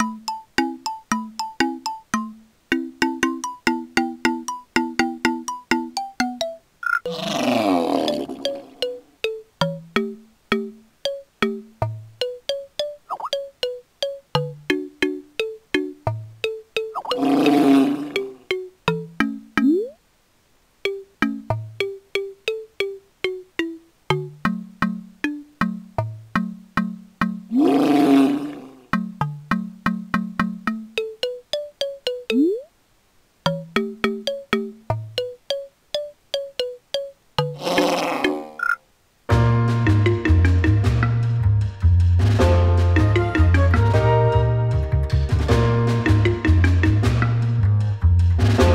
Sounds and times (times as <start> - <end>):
Music: 0.0 - 6.6, 8.1 - 17.0, 18.2 - 19.7, 20.9 - 27.5, 29.0 - 32.4, 33.5 - 37.6, 39.3 - 48.7
Roar: 7.1 - 8.4, 17.2 - 18.3, 27.5 - 28.9, 37.6 - 38.6.